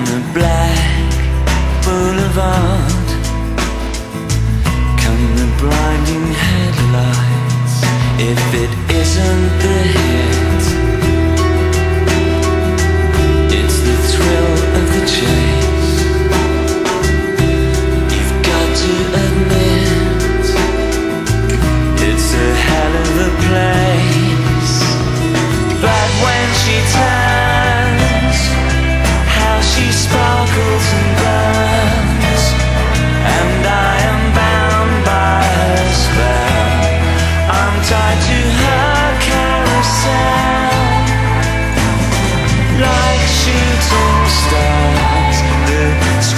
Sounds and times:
Music: 0:00.0 - 0:46.3.

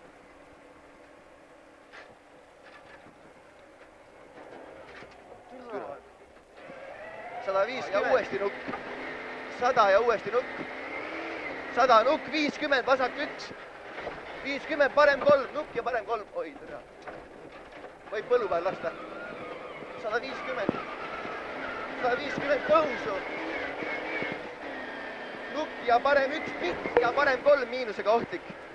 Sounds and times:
Speech: 0:05.5 - 0:06.1, 0:07.4 - 0:08.6, 0:09.5 - 0:10.5, 0:11.7 - 0:13.6, 0:14.4 - 0:16.8, 0:18.1 - 0:19.0, 0:20.0 - 0:20.8, 0:22.0 - 0:23.3, 0:25.5 - 0:28.6.

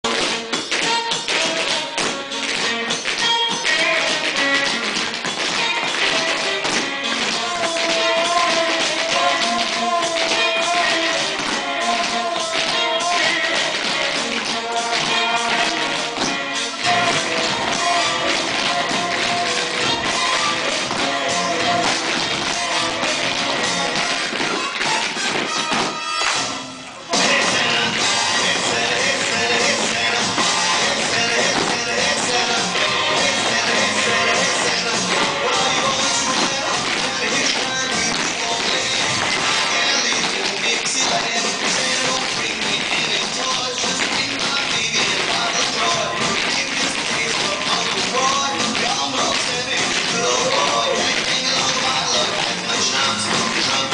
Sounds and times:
Music: 0:00.0 - 0:53.9.

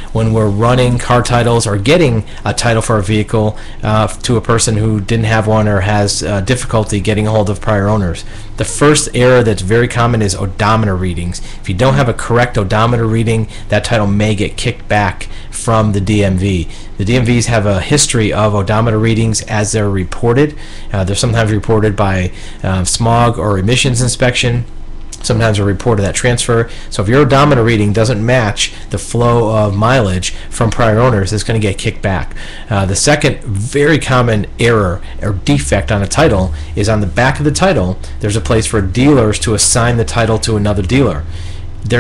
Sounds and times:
Speech: 0:00.2 - 0:42.0.

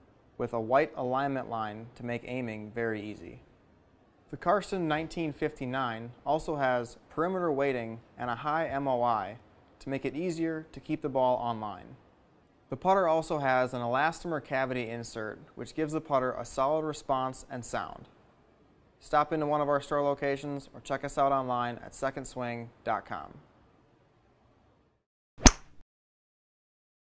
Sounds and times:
Speech: 0:00.4 - 0:03.4, 0:04.3 - 0:12.0, 0:12.7 - 0:18.1, 0:19.0 - 0:23.5.

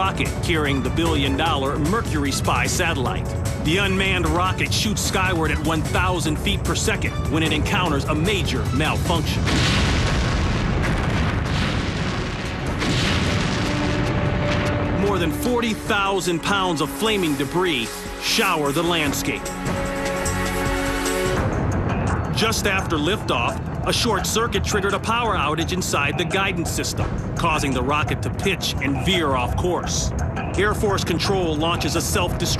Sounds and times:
Speech: 0:00.0 - 0:09.4, 0:15.0 - 0:19.5, 0:22.4 - 0:32.6
Music: 0:00.0 - 0:32.6.

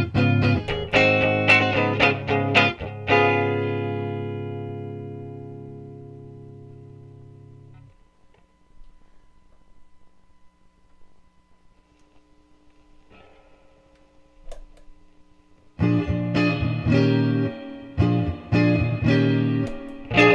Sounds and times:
Bass guitar: 0:00.0 - 0:07.9, 0:15.8 - 0:20.3.

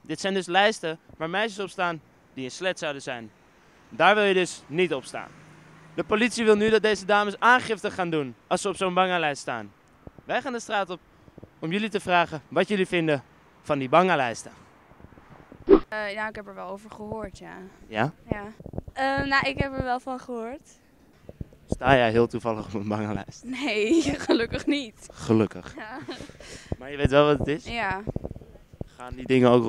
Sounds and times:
Speech: 0:16.0 - 0:20.6, 0:21.8 - 0:26.2, 0:26.8 - 0:28.1, 0:29.0 - 0:29.6.

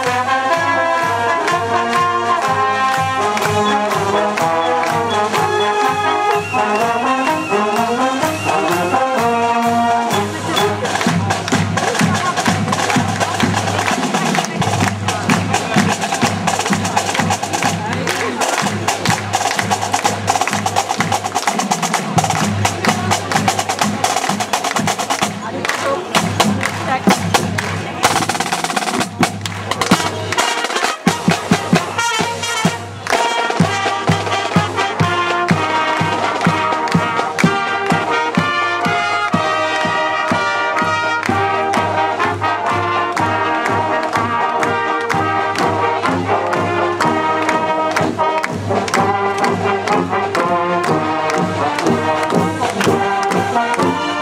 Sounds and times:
Music: 0:00.0 - 0:54.2.

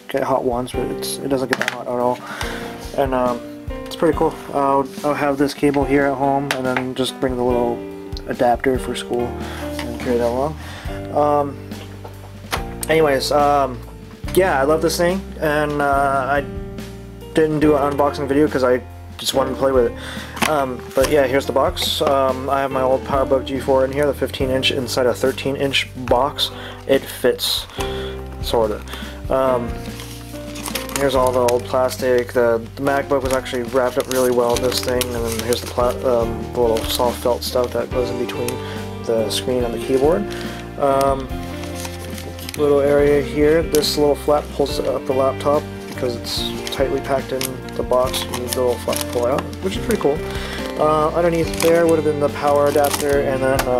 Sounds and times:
Speech: 0:00.0 - 0:02.2, 0:02.9 - 0:11.6, 0:12.9 - 0:16.5, 0:17.4 - 0:27.7, 0:28.4 - 0:29.7, 0:31.0 - 0:40.2, 0:40.8 - 0:41.3, 0:42.5 - 0:50.2, 0:50.8 - 0:53.7
Music: 0:00.0 - 0:53.7.

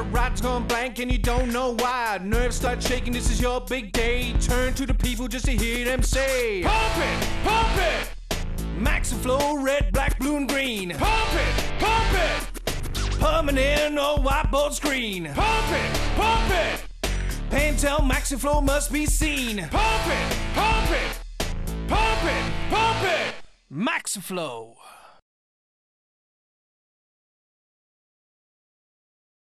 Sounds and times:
Music: 0:00.0 - 0:23.7
Speech: 0:22.8 - 0:25.2.

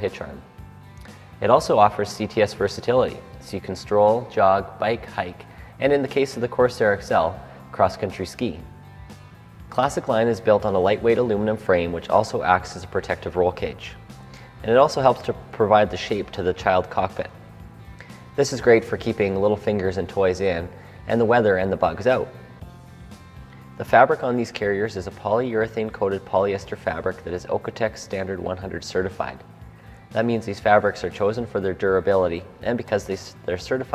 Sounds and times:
Speech: 0:00.0 - 0:00.4, 0:01.4 - 0:08.7, 0:09.7 - 0:14.0, 0:14.6 - 0:17.4, 0:18.4 - 0:22.4, 0:23.8 - 0:29.4, 0:30.1 - 0:33.9
Music: 0:00.0 - 0:33.9.

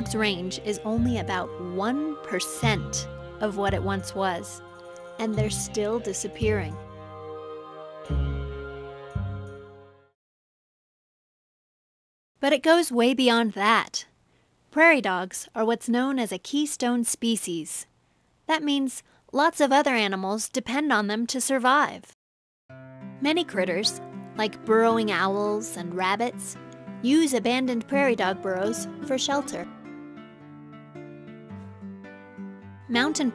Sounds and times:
Speech: 0:00.0 - 0:04.6, 0:05.2 - 0:06.8, 0:12.4 - 0:14.1, 0:14.8 - 0:17.9, 0:18.5 - 0:22.2, 0:23.2 - 0:29.7, 0:32.9 - 0:33.3
Music: 0:00.0 - 0:10.2, 0:22.7 - 0:33.3.

